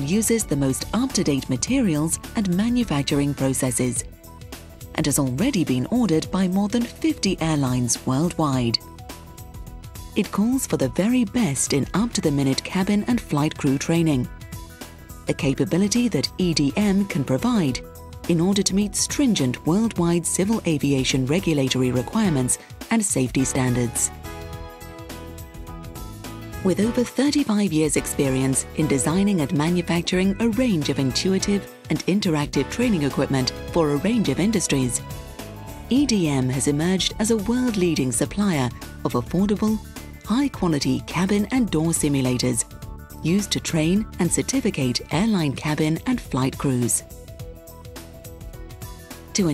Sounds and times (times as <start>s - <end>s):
Speech: 0.0s - 4.1s, 5.0s - 8.8s, 10.2s - 14.3s, 15.3s - 24.1s, 26.6s - 35.0s, 35.9s - 42.6s, 43.2s - 47.0s
Music: 0.0s - 49.5s.